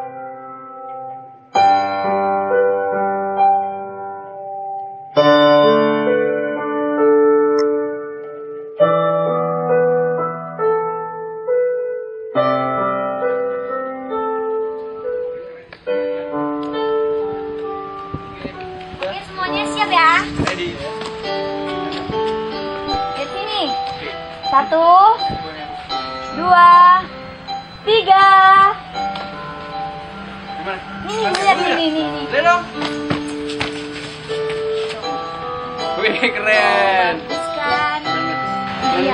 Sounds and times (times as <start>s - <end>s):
Background music: 0.0s - 39.1s
Tender music: 0.0s - 39.1s.